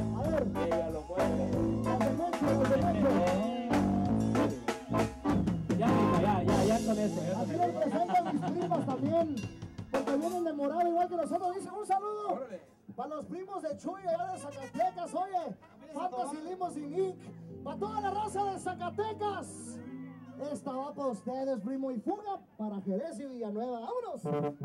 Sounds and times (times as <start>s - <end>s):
Speech: 0.0s - 4.0s, 5.8s - 9.4s, 10.0s - 24.6s
Music: 0.0s - 11.1s, 16.0s - 21.3s, 24.2s - 24.6s.